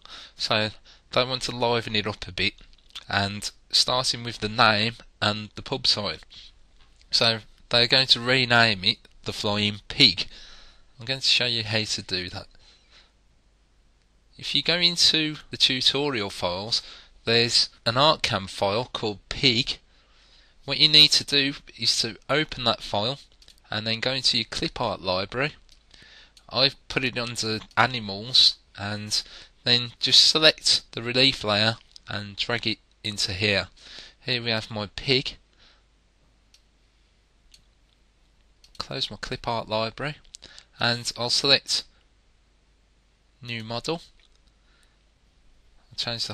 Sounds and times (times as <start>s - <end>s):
Speech: 0.0s - 6.4s, 7.1s - 10.3s, 11.0s - 12.5s, 14.4s - 19.8s, 20.7s - 25.6s, 26.5s - 35.4s, 38.8s - 41.9s, 43.4s - 44.1s, 46.0s - 46.3s.